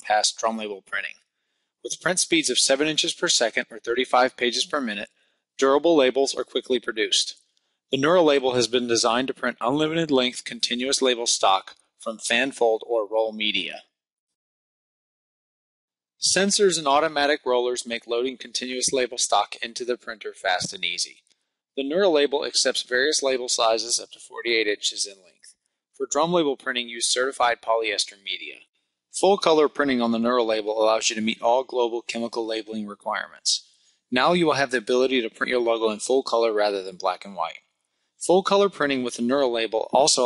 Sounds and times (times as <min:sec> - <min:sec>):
Speech: 0:00.0 - 0:01.2, 0:01.9 - 0:07.4, 0:08.0 - 0:14.0, 0:16.2 - 0:21.2, 0:21.8 - 0:37.6, 0:38.2 - 0:40.2.